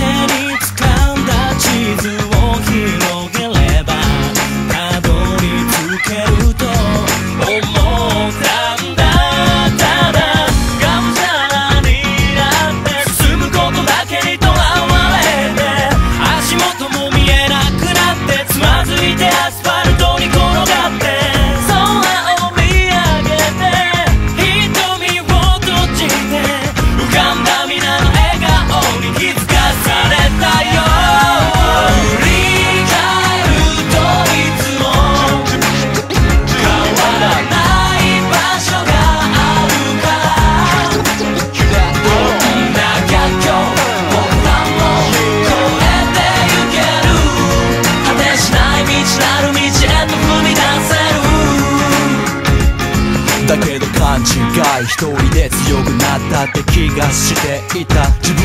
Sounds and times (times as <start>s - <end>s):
Music: 0.0s - 58.4s.